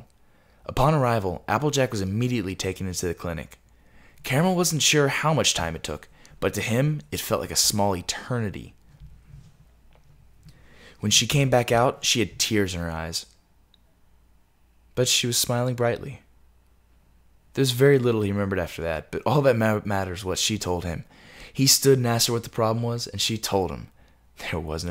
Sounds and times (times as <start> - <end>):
Narration, monologue: 0.0 - 24.9.